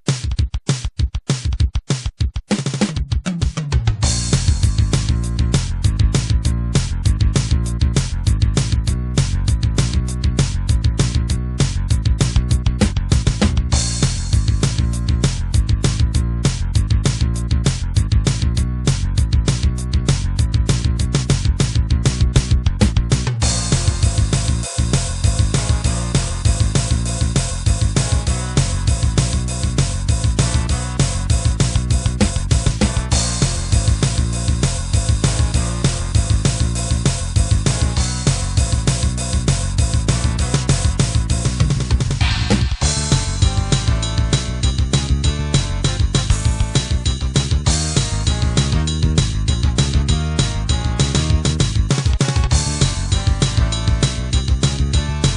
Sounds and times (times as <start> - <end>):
Music: 0.1 - 55.3.